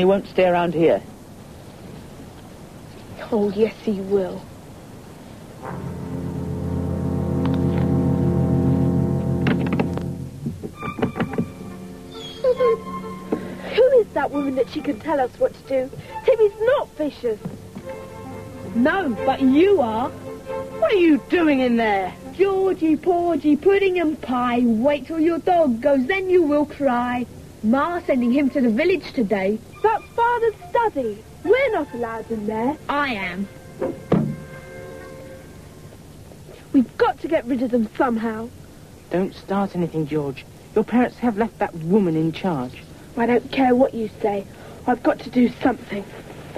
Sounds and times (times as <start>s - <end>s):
Music: 5.6s - 24.2s, 28.0s - 36.1s.